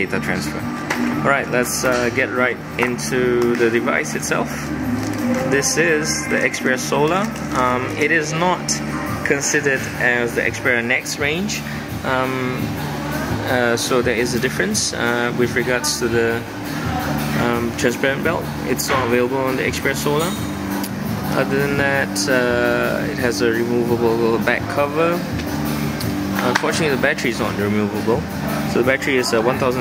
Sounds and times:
Speech: 0:00.0 - 0:00.6, 0:01.2 - 0:04.6, 0:05.5 - 0:12.6, 0:13.4 - 0:16.5, 0:17.4 - 0:20.4, 0:21.3 - 0:25.2, 0:26.4 - 0:29.8
Music: 0:00.0 - 0:29.8.

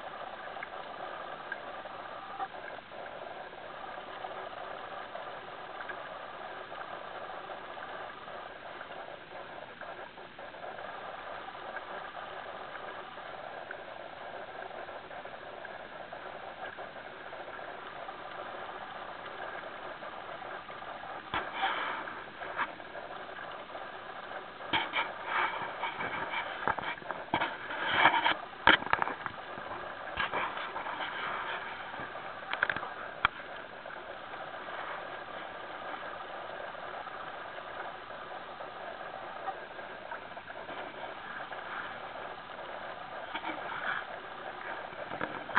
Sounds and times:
Boat, Water vehicle: 0:00.0 - 0:45.5.

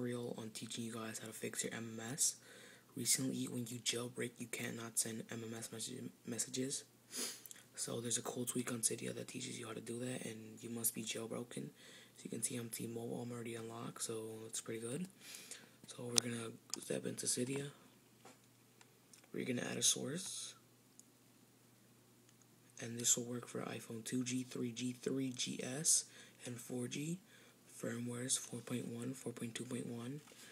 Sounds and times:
Speech: 0:00.0 - 0:02.4, 0:03.0 - 0:06.9, 0:07.8 - 0:15.1, 0:15.9 - 0:17.8, 0:19.3 - 0:20.6, 0:22.8 - 0:30.3
Inside, small room: 0:00.0 - 0:30.5.

